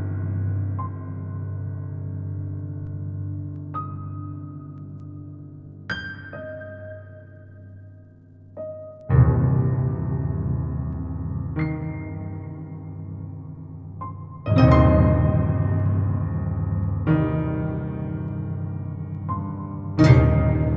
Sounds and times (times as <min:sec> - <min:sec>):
Music: 0:00.0 - 0:20.7.